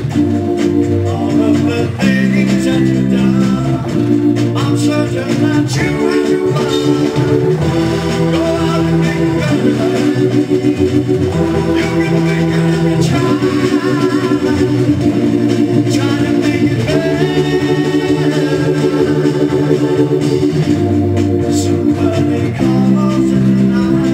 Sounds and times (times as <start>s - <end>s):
Music: 0.0s - 24.1s.